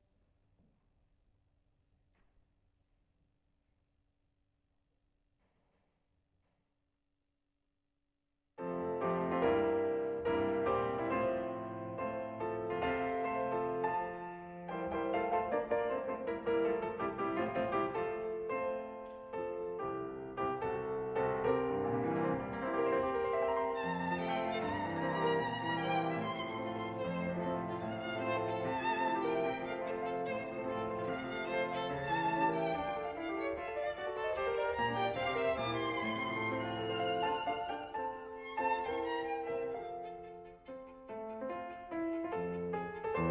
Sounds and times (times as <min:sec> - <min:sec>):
Violin, fiddle: 0:21.4 - 0:43.3.